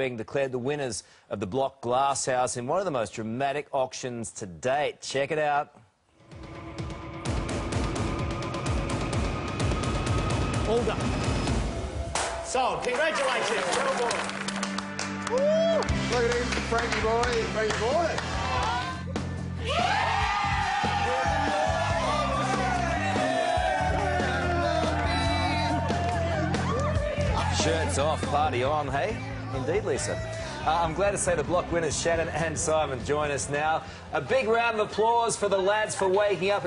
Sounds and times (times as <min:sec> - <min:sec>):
Music: 0:06.2 - 0:36.6.